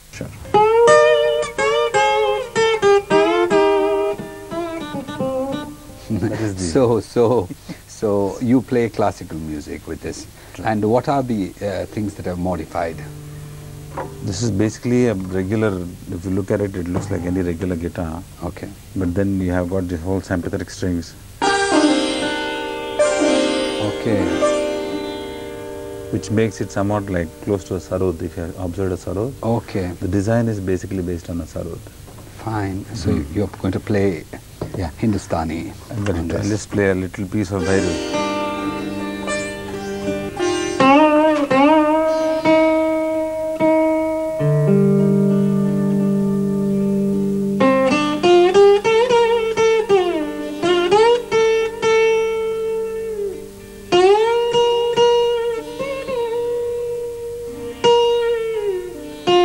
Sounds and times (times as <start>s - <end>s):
Speech: 0.0s - 0.5s, 6.1s - 13.1s, 14.2s - 21.2s, 23.8s - 24.4s, 26.1s - 31.8s, 32.4s - 38.0s
Sitar: 21.4s - 30.5s, 37.4s - 59.4s.